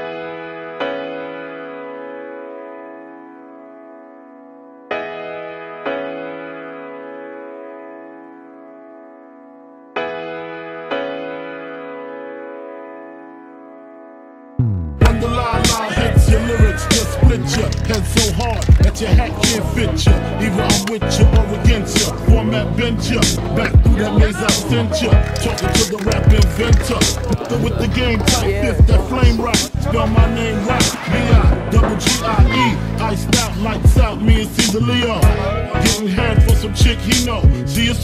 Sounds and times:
Music: 0.0 - 38.0
Speech: 15.4 - 21.3, 23.2 - 30.9, 32.0 - 32.8.

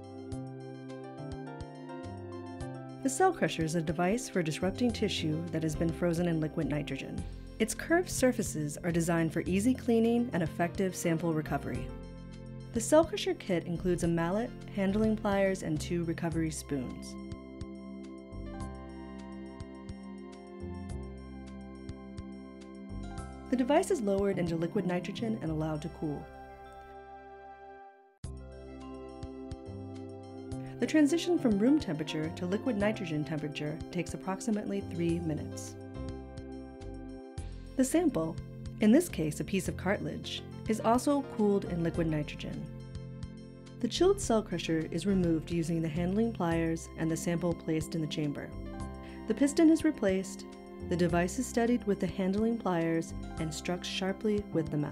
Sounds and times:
Music: 0.0 - 54.9
Speech: 3.1 - 11.9, 12.8 - 17.2, 23.5 - 26.3, 30.8 - 35.8, 37.8 - 42.7, 43.8 - 48.6, 49.3 - 54.9.

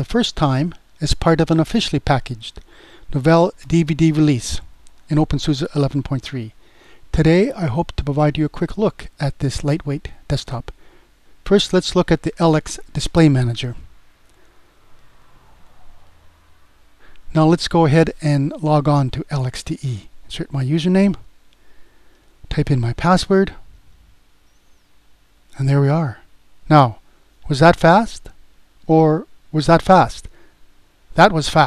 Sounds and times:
Speech: 0.0 - 6.5, 7.1 - 10.7, 11.4 - 13.9, 17.3 - 21.3, 22.5 - 23.6, 25.6 - 30.3, 31.2 - 31.6.

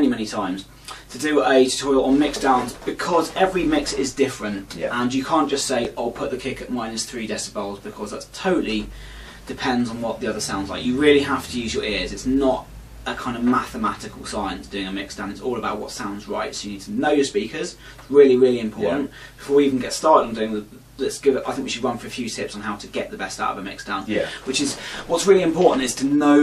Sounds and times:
Speech: 0.0 - 26.4.

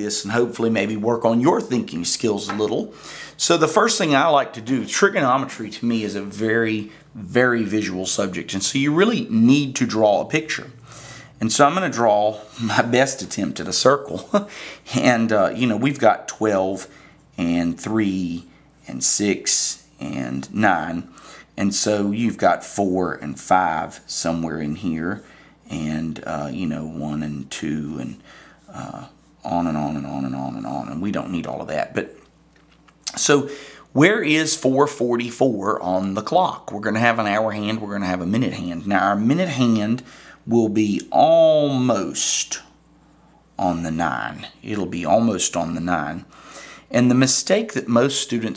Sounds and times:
Speech: 0.0 - 10.8, 11.4 - 32.3, 33.1 - 42.8, 43.6 - 46.3, 46.9 - 48.5.

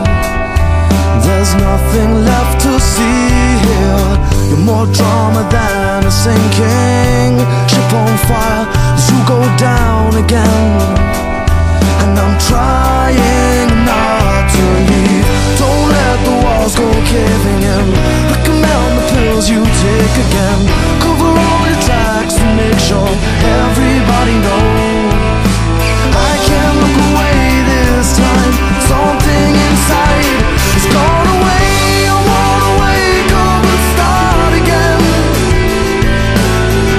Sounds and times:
Music: 0.0 - 36.9.

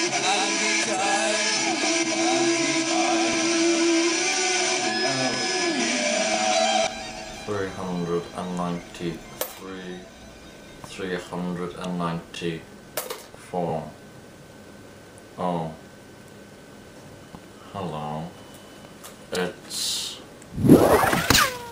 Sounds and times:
Speech: 7.5 - 10.1, 10.9 - 12.7, 13.4 - 14.0, 15.4 - 15.8, 17.7 - 18.4, 19.3 - 20.3.

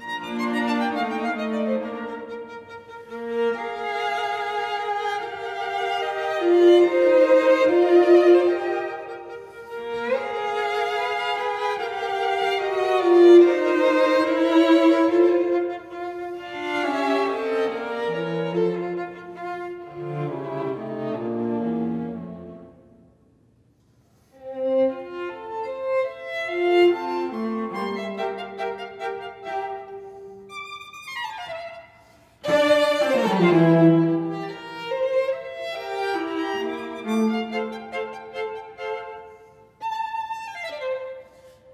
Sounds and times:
Violin, fiddle: 0.0 - 22.6, 24.2 - 41.7
Cello: 0.0 - 23.2, 23.8 - 41.7
Orchestra: 0.0 - 41.7
String section: 0.0 - 41.7.

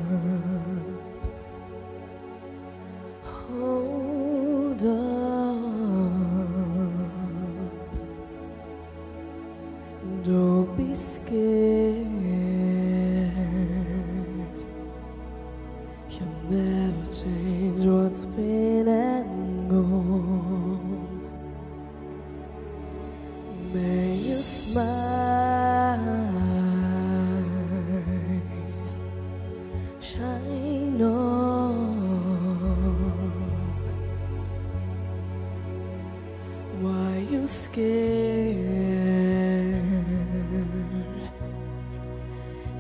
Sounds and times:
Music: 0.0 - 42.8.

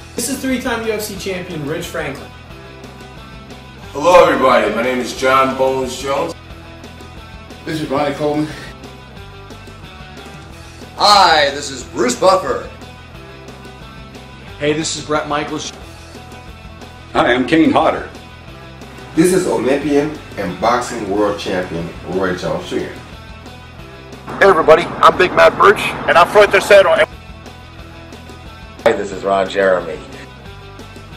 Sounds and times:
Music: 0.0 - 31.1
Speech: 0.2 - 2.3, 4.0 - 6.4, 7.7 - 8.7, 11.0 - 12.7, 14.6 - 15.8, 19.2 - 23.0, 24.3 - 27.1, 28.9 - 30.2.

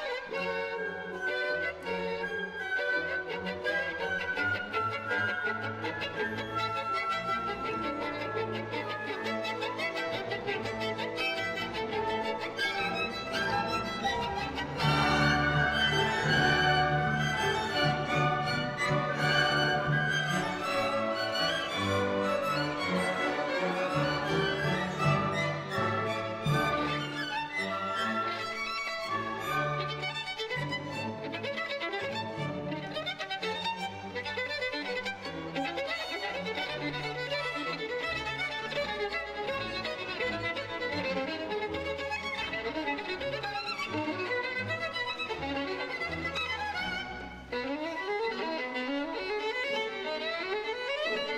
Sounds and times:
Violin, fiddle: 0.0 - 51.3.

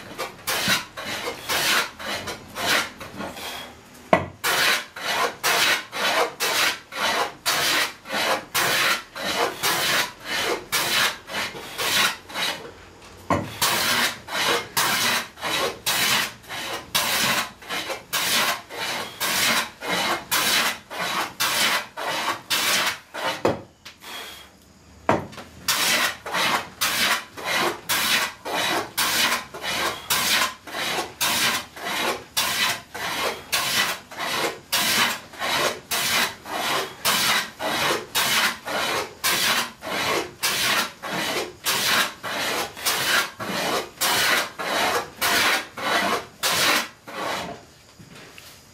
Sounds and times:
Rub: 0.0 - 3.6, 4.4 - 12.6, 13.6 - 23.4, 25.7 - 47.6
Filing (rasp): 0.0 - 3.8, 4.4 - 12.7, 13.3 - 24.4, 25.7 - 47.6
Wood: 0.0 - 12.7, 13.3 - 23.7, 25.1 - 47.6.

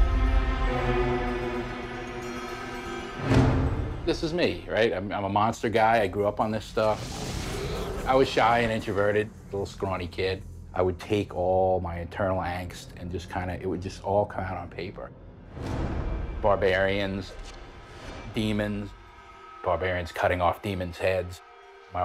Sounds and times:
Music: 0.0 - 22.0
Speech: 4.1 - 7.1, 8.0 - 15.1, 16.4 - 17.4, 18.3 - 19.0, 19.6 - 21.4.

